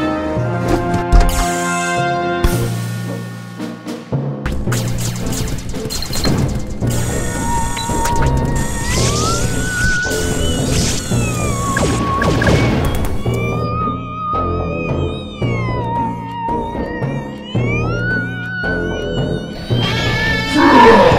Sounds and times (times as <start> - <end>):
Music: 0.0 - 21.1.